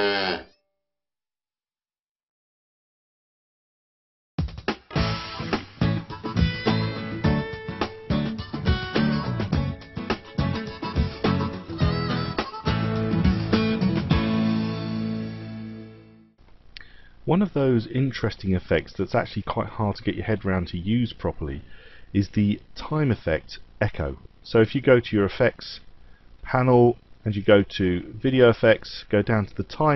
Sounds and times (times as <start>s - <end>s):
Speech: 17.3s - 29.9s.